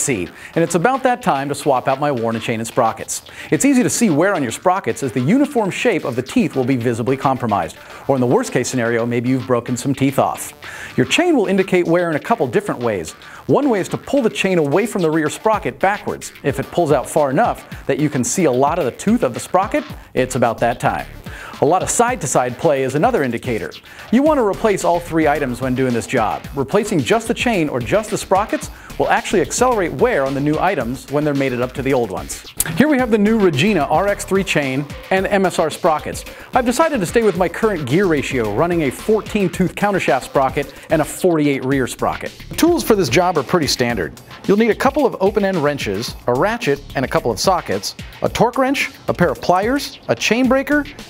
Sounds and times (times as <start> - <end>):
Speech: 0.0 - 50.9
Music: 0.0 - 51.0.